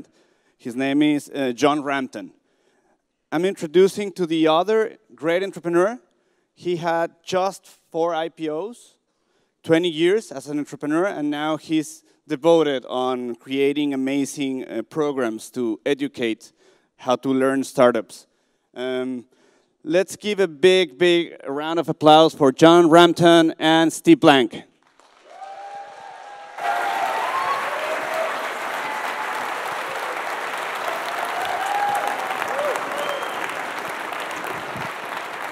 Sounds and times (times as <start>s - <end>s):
Speech: 0.6s - 2.4s, 3.3s - 6.0s, 6.6s - 9.0s, 9.7s - 24.7s.